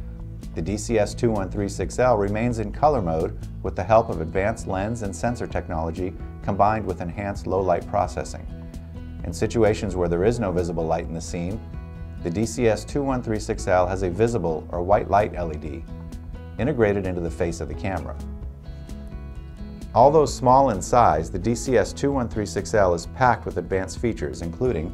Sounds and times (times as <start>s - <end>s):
Music: 0.0s - 24.9s
Speech: 0.6s - 8.5s, 9.2s - 11.6s, 12.2s - 15.8s, 16.6s - 18.2s, 20.0s - 24.9s.